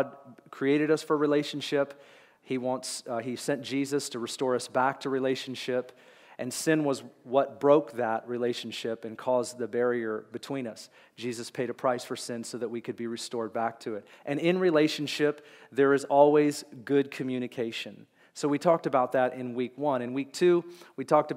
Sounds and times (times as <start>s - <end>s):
Speech: 0.0s - 21.3s.